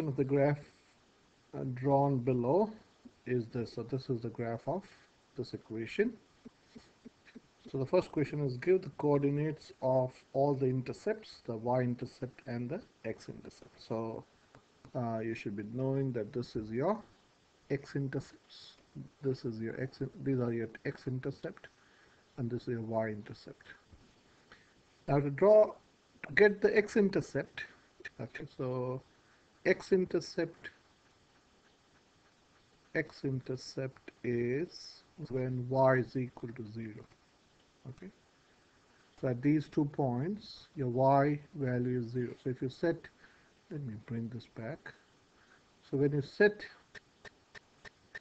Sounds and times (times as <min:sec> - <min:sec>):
Speech: 0:00.0 - 0:00.7, 0:01.5 - 0:06.2, 0:07.3 - 0:14.3, 0:14.9 - 0:17.1, 0:17.7 - 0:21.7, 0:22.4 - 0:23.8, 0:25.1 - 0:29.1, 0:29.7 - 0:30.8, 0:33.0 - 0:37.2, 0:37.9 - 0:38.2, 0:39.2 - 0:45.0, 0:45.8 - 0:46.8.